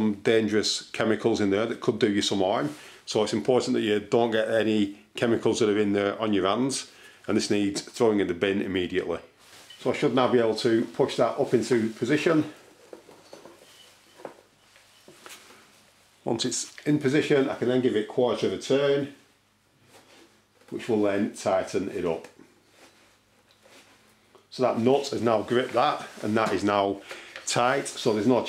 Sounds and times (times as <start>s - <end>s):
Speech: 0.0s - 12.6s, 16.2s - 19.2s, 20.7s - 22.4s, 24.5s - 28.4s
Inside, small room: 0.0s - 28.4s.